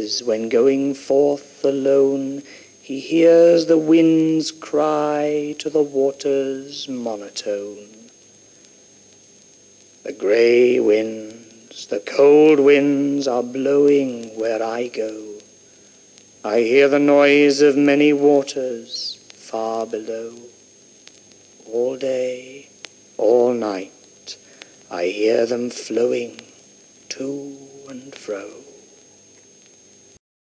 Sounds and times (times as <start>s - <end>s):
White noise: 0.0s - 30.2s
Speech: 21.7s - 26.5s, 27.1s - 28.8s.